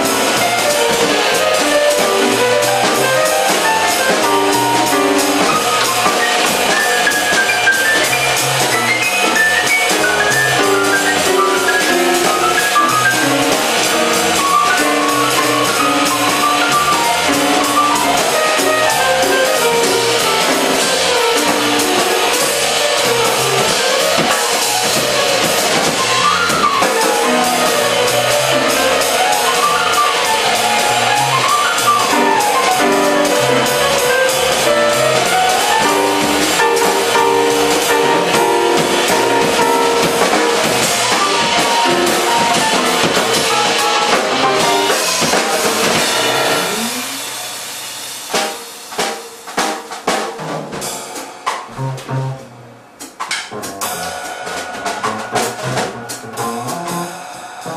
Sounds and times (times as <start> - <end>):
Bass drum: 0.0 - 47.3, 49.5 - 52.9, 53.5 - 57.7
Drum kit: 0.0 - 57.7
Rimshot: 0.0 - 57.7.